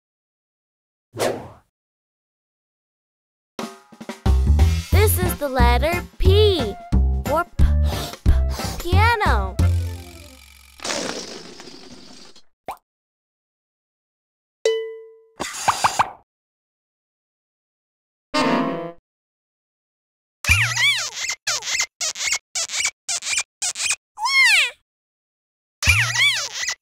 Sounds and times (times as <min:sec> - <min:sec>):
Music: 0:03.6 - 0:10.4
Child speech, kid speaking: 0:05.0 - 0:07.5, 0:08.8 - 0:09.6.